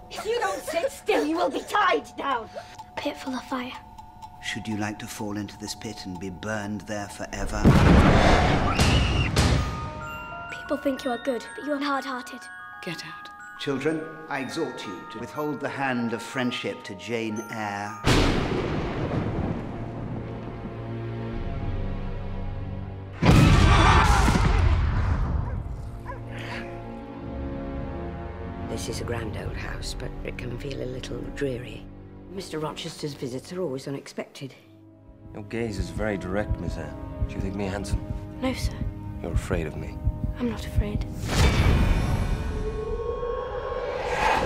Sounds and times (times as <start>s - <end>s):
Music: 0.0s - 44.4s.